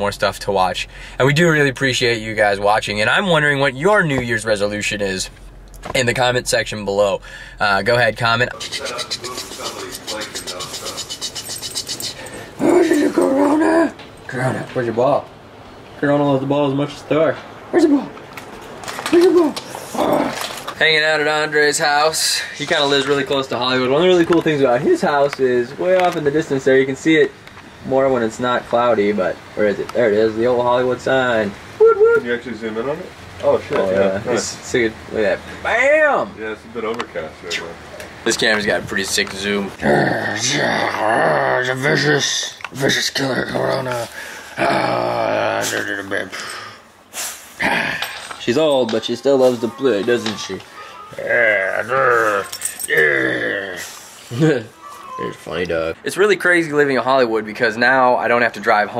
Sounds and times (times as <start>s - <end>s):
Outside, rural or natural: 0.0s - 58.9s.